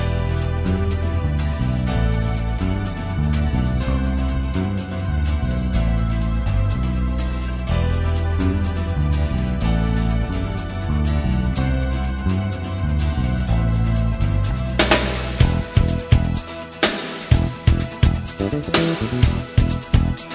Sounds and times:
Music: 0.0s - 20.3s.

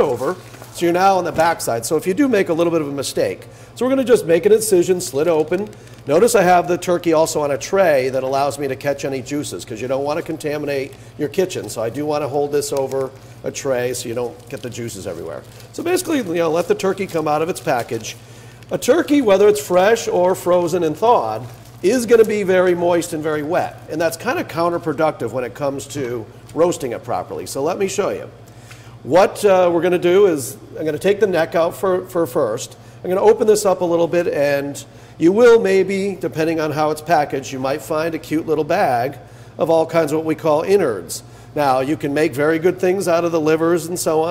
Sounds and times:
Speech: 0.0s - 28.4s, 29.0s - 44.3s.

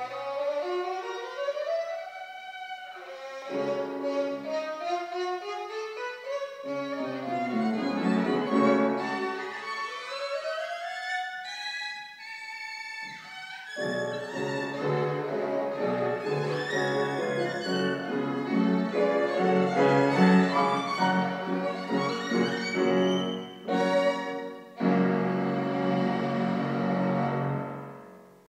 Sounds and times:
Music: 0.0s - 28.5s.

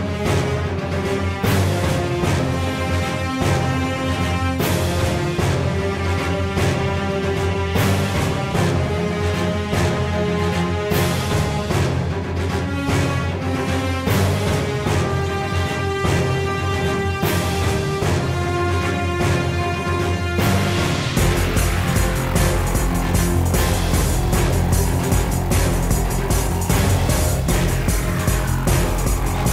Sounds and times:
Music: 0.0s - 29.5s.

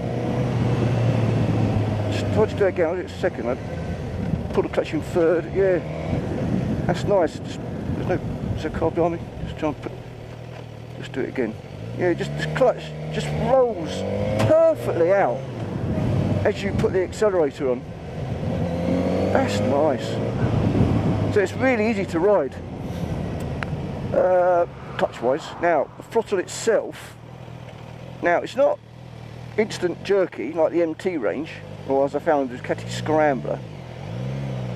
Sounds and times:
Motorcycle: 0.0s - 34.7s
Speech: 2.1s - 3.6s, 4.5s - 5.8s, 6.9s - 9.9s, 11.0s - 15.5s, 16.4s - 17.8s, 19.4s - 20.3s, 21.3s - 22.6s, 24.1s - 27.2s, 28.2s - 28.8s, 29.6s - 33.6s.

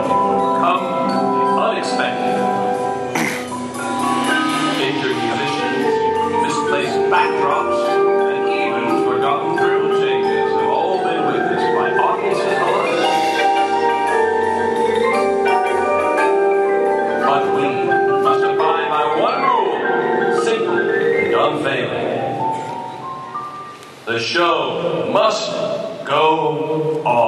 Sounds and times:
Percussion: 0.0s - 24.1s
Speech: 0.6s - 2.4s, 4.8s - 13.6s, 17.2s - 22.1s, 24.1s - 27.2s.

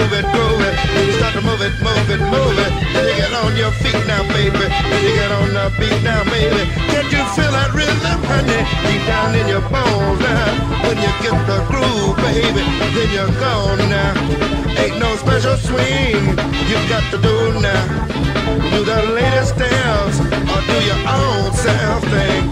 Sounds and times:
Background music: 0.0s - 22.5s
Soundtrack music: 0.0s - 22.5s.

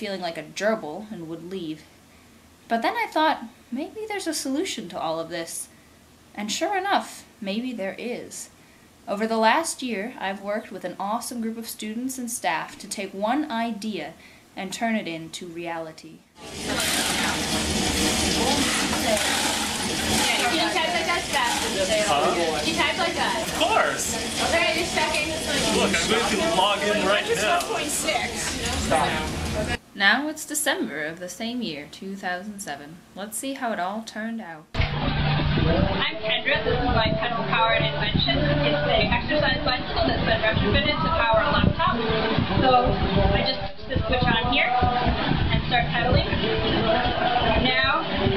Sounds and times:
Speech: 0.0s - 1.9s, 2.7s - 5.7s, 6.4s - 8.5s, 9.1s - 16.2s, 20.2s - 34.7s, 42.6s - 46.4s.

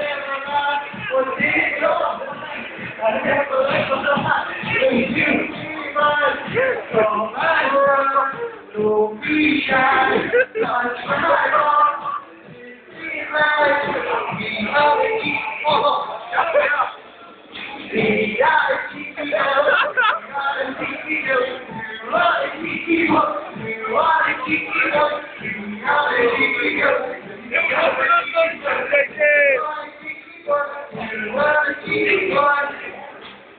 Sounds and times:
Male singing: 0.0s - 17.0s, 17.6s - 33.3s
Music: 0.0s - 33.5s.

